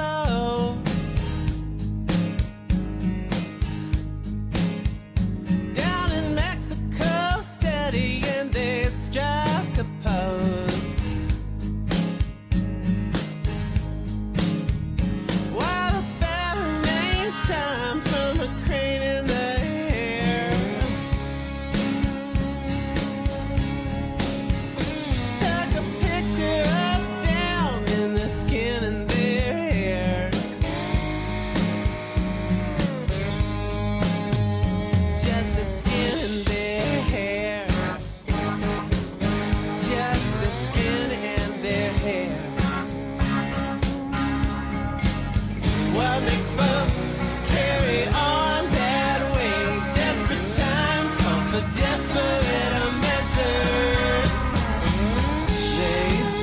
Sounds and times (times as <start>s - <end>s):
Music: 0.0s - 56.4s.